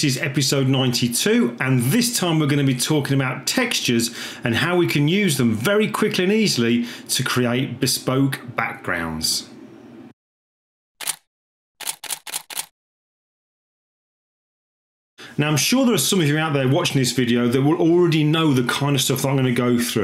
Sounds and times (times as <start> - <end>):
Speech: 0.0 - 9.6, 15.4 - 20.0.